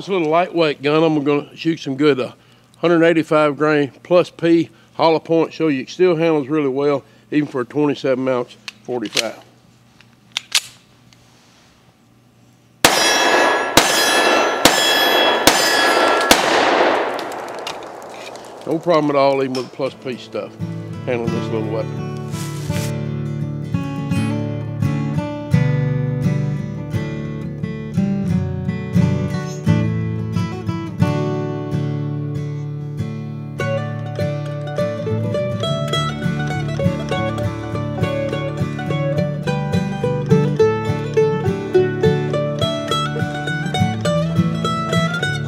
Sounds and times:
Gunshot, gunfire: 12.9s - 19.7s.

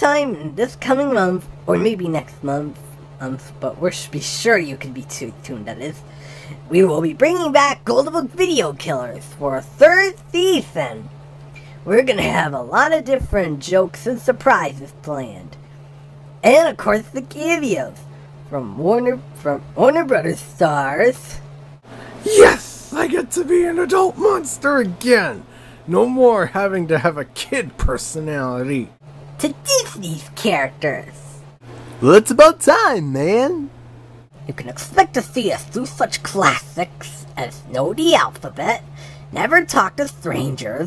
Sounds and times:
Speech: 0.0s - 6.0s, 6.7s - 11.1s, 11.9s - 15.6s, 16.4s - 21.4s, 22.3s - 31.3s, 32.0s - 33.7s, 34.5s - 38.8s, 39.4s - 40.8s.

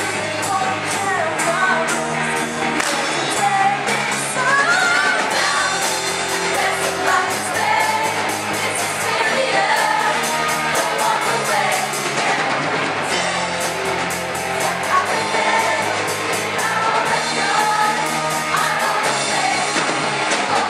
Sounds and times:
Choir: 3.0s - 13.2s, 14.6s - 20.7s.

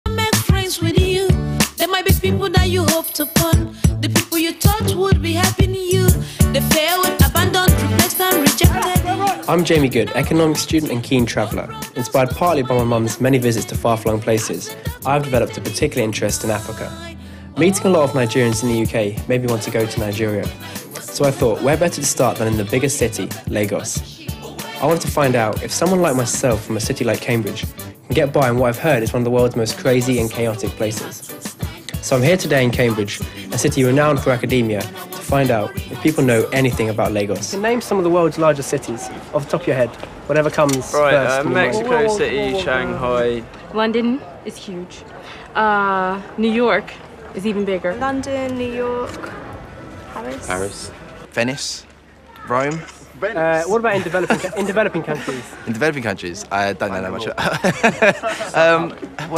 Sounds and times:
Music: 0.1s - 39.1s, 40.9s - 43.2s, 53.8s - 55.9s.

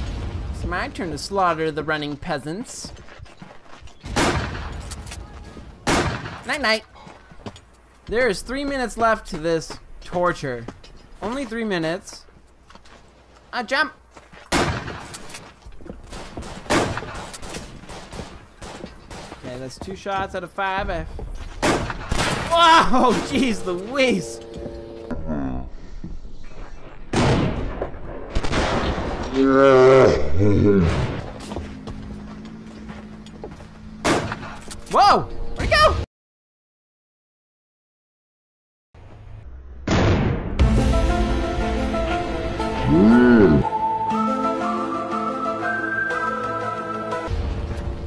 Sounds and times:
Gunshot, gunfire: 4.1s - 4.8s, 5.8s - 6.5s, 14.5s - 15.1s, 16.1s - 17.3s, 21.6s - 22.5s, 27.1s - 29.4s, 34.0s - 34.6s, 39.9s - 40.6s.

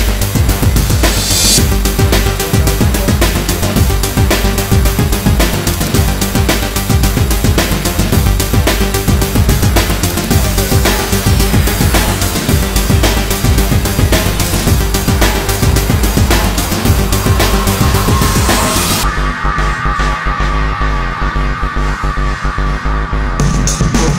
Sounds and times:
Music: 0.0s - 24.1s.

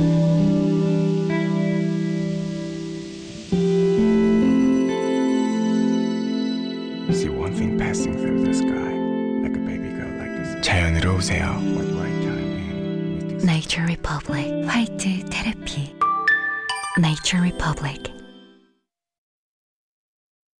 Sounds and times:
Music: 0.0s - 18.9s
Speech: 7.1s - 15.9s, 17.0s - 18.2s.

